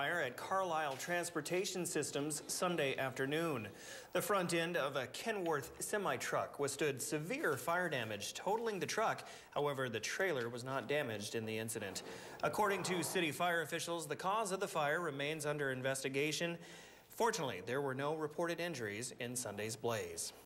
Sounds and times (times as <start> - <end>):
Speech: 0.0 - 20.4.